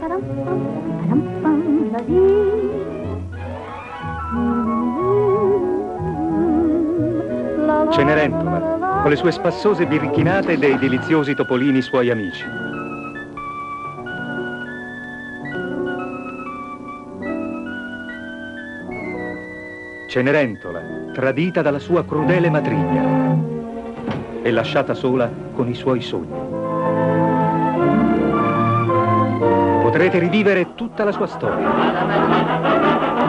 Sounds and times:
Music: 0.0s - 33.2s
Television: 7.4s - 14.8s, 21.2s - 33.2s
Speech: 9.1s - 12.5s, 20.1s - 23.0s, 24.5s - 26.3s, 29.8s - 32.5s.

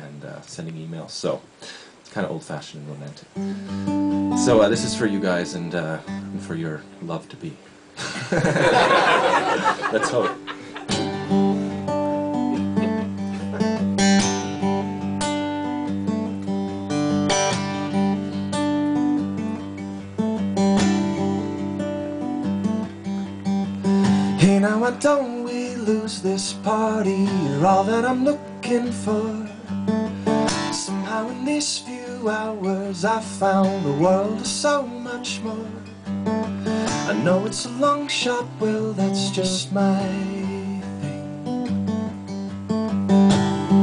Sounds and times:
Speech: 0.0s - 1.5s, 2.1s - 3.2s, 4.4s - 7.6s, 9.9s - 10.4s
Music: 3.4s - 7.4s, 9.2s - 43.8s.

